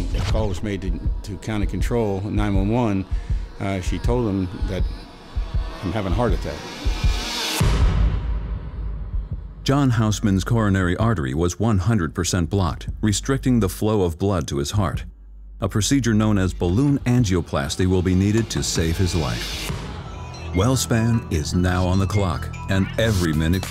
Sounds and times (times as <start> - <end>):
Speech: 0.0 - 5.0, 5.8 - 6.7, 9.7 - 19.6, 20.5 - 23.7
Music: 0.0 - 11.3, 15.1 - 23.7.